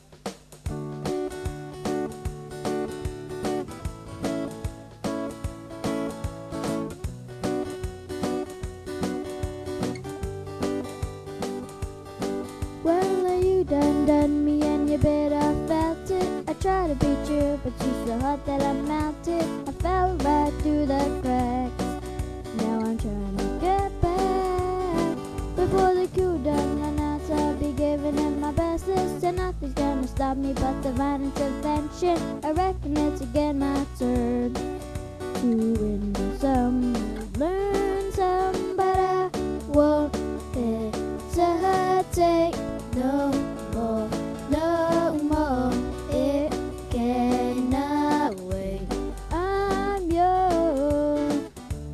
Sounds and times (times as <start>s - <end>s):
Music: 0.0s - 51.9s.